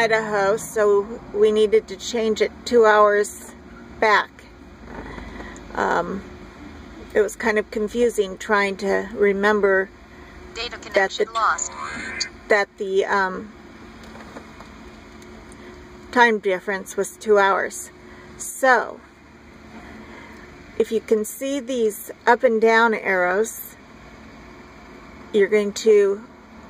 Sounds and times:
Speech: 0:10.6 - 0:13.4.

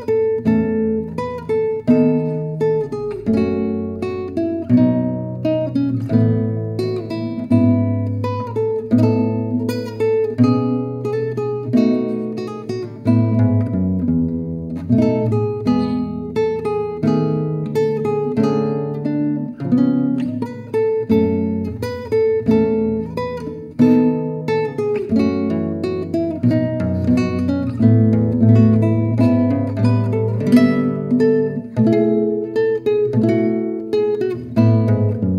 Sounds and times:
Acoustic guitar: 0:00.0 - 0:35.3
Strum: 0:00.0 - 0:35.3.

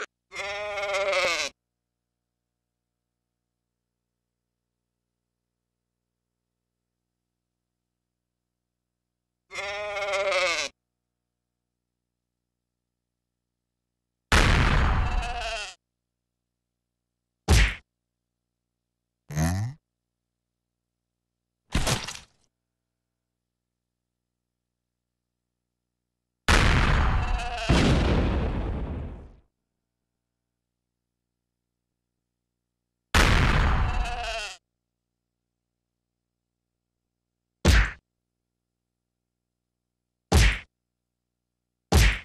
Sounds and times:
Bleat: 0:00.0 - 0:01.6, 0:09.5 - 0:10.8, 0:14.9 - 0:15.8, 0:27.0 - 0:27.8, 0:33.7 - 0:34.7.

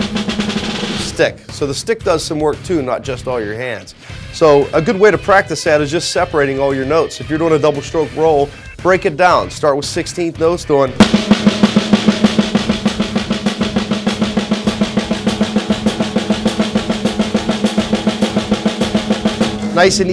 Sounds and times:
Drum: 0:00.0 - 0:02.9, 0:10.9 - 0:20.1
Drum kit: 0:00.0 - 0:20.1
Speech: 0:01.0 - 0:11.0, 0:19.8 - 0:20.1.

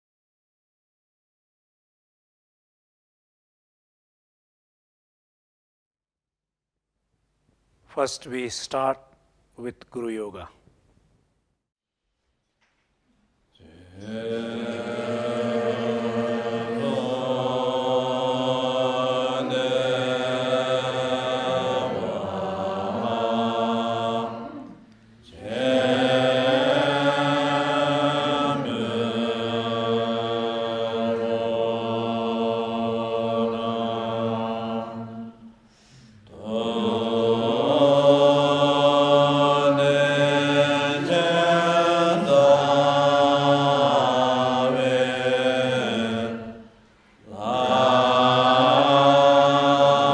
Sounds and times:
Mantra: 0:13.6 - 0:35.6, 0:36.2 - 0:50.1.

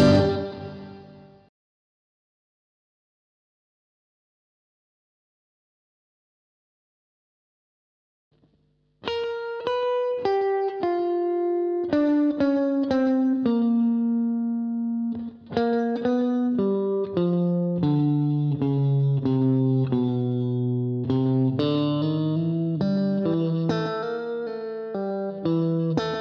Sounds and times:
Steel guitar, slide guitar: 0:00.0 - 0:01.0, 0:09.1 - 0:26.2.

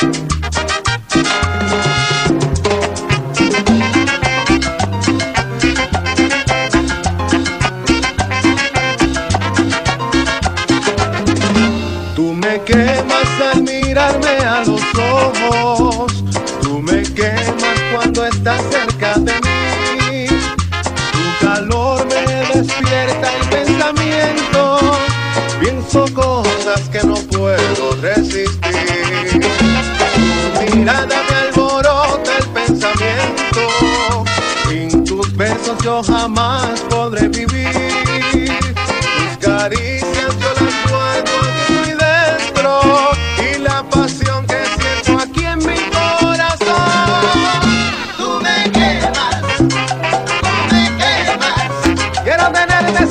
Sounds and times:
Music: 0:00.0 - 0:53.1.

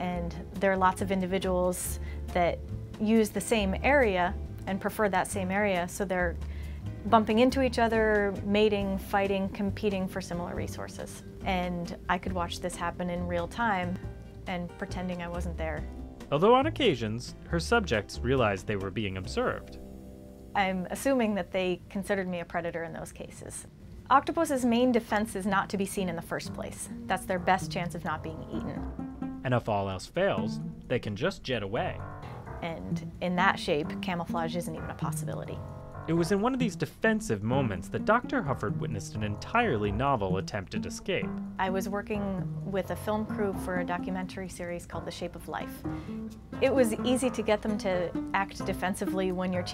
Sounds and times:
Speech: 0:00.0 - 0:06.4, 0:07.1 - 0:19.8, 0:20.6 - 0:28.8, 0:29.5 - 0:32.0, 0:32.6 - 0:45.8, 0:46.6 - 0:49.7
Music: 0:00.0 - 0:49.7.

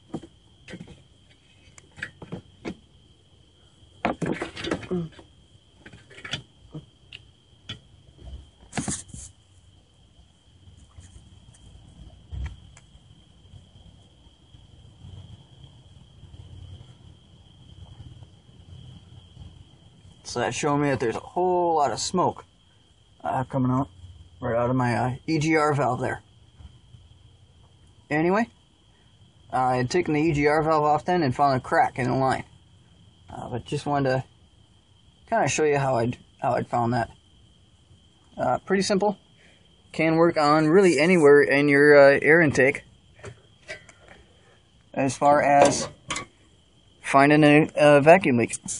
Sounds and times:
Speech: 0:04.8 - 0:05.2, 0:20.2 - 0:22.4, 0:23.2 - 0:26.2, 0:28.1 - 0:28.5, 0:29.5 - 0:32.5, 0:33.3 - 0:34.3, 0:35.3 - 0:37.1, 0:38.4 - 0:39.2, 0:39.9 - 0:42.8, 0:44.9 - 0:45.9, 0:47.0 - 0:48.7.

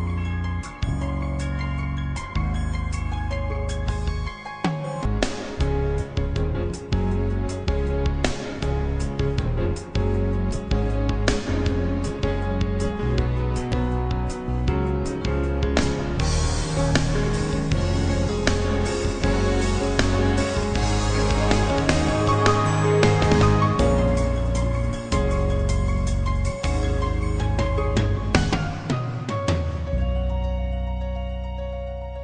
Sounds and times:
Theme music: 0:00.0 - 0:32.2.

